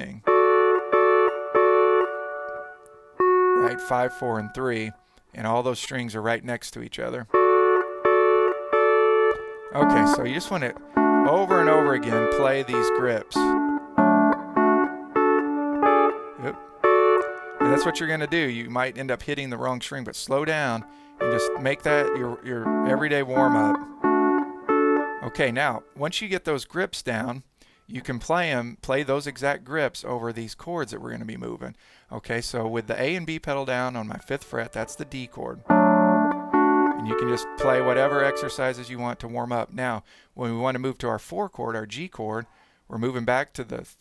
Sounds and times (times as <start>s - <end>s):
Speech: 0.0s - 0.3s, 3.6s - 7.3s, 9.8s - 13.6s, 16.4s - 16.6s, 17.6s - 23.8s, 25.2s - 35.6s, 37.0s - 44.0s.